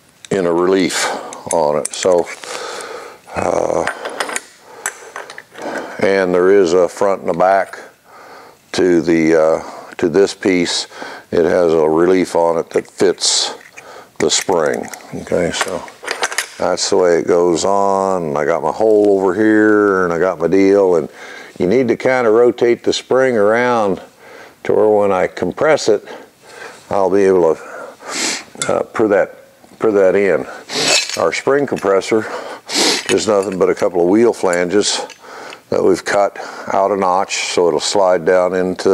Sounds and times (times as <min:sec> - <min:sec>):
Speech: 0:00.3 - 0:02.4, 0:03.3 - 0:03.9, 0:06.0 - 0:07.9, 0:08.7 - 0:13.6, 0:14.2 - 0:16.0, 0:16.6 - 0:26.2, 0:26.9 - 0:27.7, 0:28.6 - 0:32.3, 0:33.1 - 0:35.1, 0:35.7 - 0:38.9.